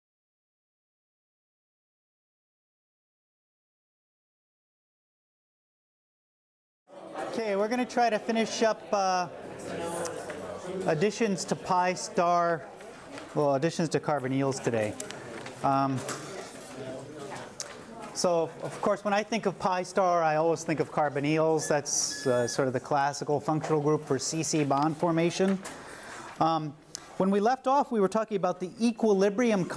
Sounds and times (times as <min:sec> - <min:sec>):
Speech: 0:07.0 - 0:25.6, 0:26.4 - 0:29.7.